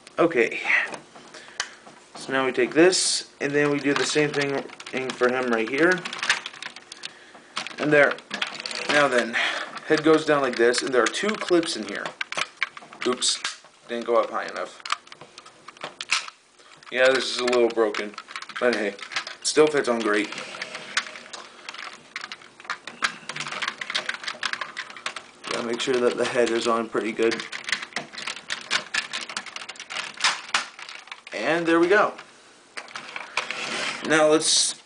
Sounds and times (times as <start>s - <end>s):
Speech: 0.2s - 0.7s, 2.2s - 6.1s, 8.9s - 12.1s, 13.0s - 14.8s, 16.9s - 20.3s, 25.5s - 27.5s, 31.4s - 32.2s, 34.0s - 34.8s.